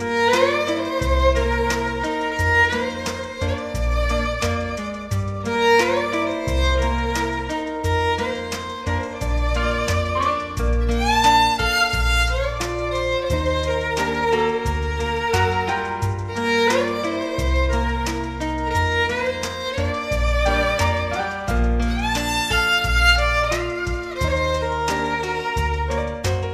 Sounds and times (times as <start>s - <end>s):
Violin, fiddle: 0.0s - 26.5s.